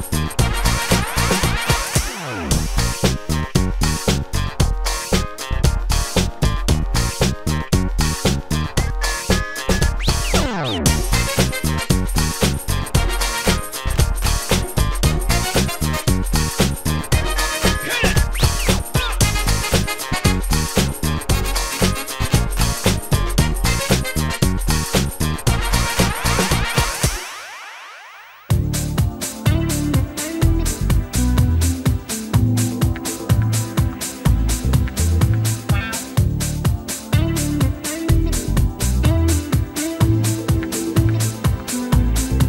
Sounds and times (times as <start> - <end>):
Music: 0.0 - 42.4.